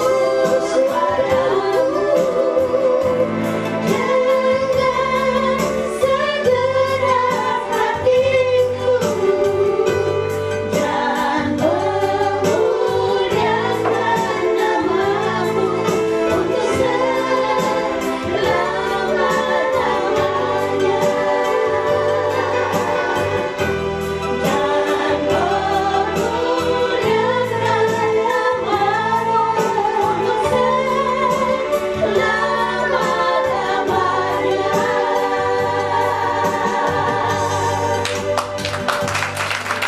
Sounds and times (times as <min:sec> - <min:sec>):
Choir: 0:00.0 - 0:39.8
Gospel music: 0:00.0 - 0:39.8.